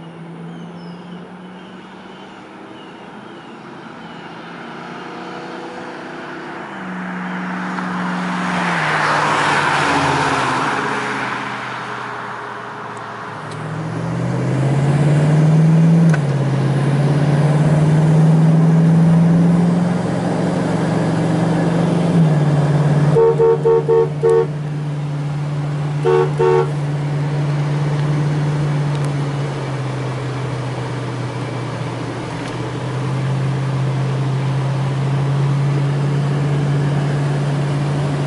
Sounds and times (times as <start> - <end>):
Vehicle horn, car horn, honking: 23.1 - 24.5, 26.0 - 26.8.